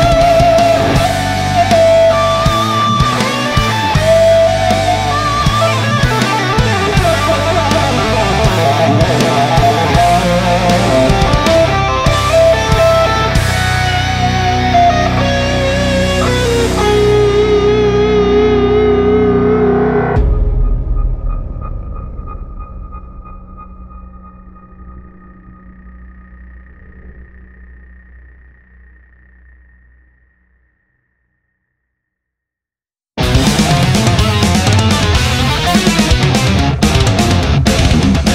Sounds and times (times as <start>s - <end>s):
Music: 0.0s - 29.1s, 33.2s - 38.3s.